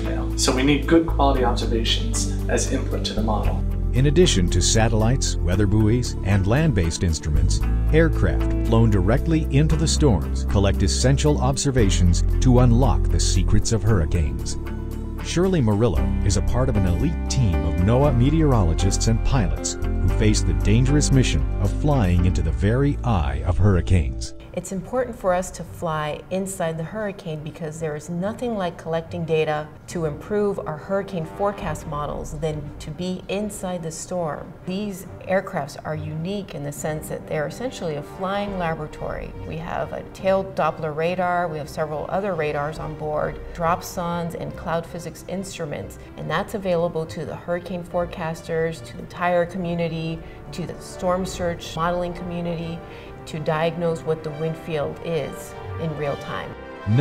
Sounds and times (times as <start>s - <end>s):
Speech: 0.0s - 14.6s, 15.2s - 57.0s
Music: 0.0s - 57.0s.